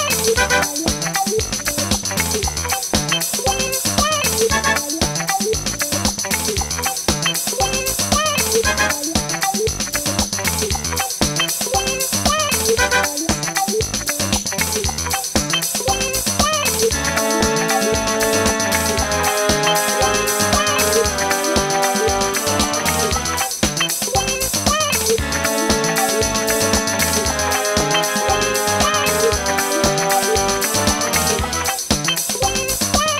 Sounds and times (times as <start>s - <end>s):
Music: 0.0s - 33.1s.